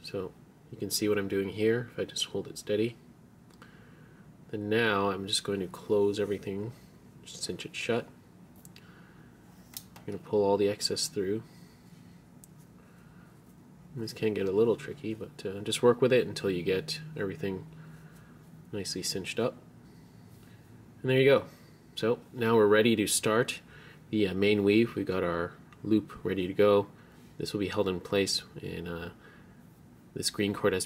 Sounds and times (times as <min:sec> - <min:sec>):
Speech: 0:00.0 - 0:03.0, 0:04.5 - 0:08.1, 0:10.1 - 0:11.5, 0:13.9 - 0:17.7, 0:18.7 - 0:19.6, 0:21.0 - 0:29.2, 0:30.2 - 0:30.8
Inside, small room: 0:00.0 - 0:30.8.